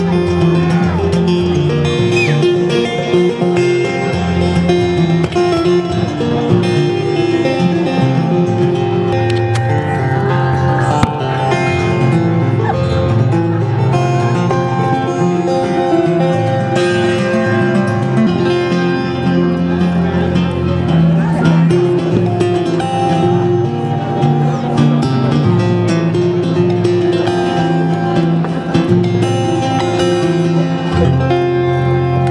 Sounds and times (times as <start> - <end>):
Guitar: 0.0 - 32.3.